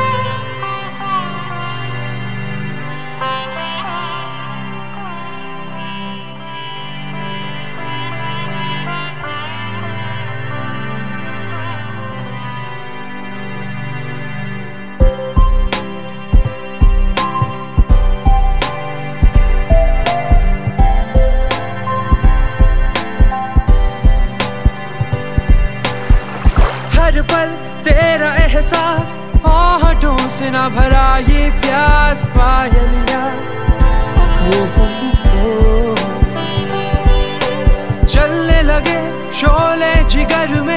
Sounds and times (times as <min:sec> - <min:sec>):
Soundtrack music: 0:25.9 - 0:28.9.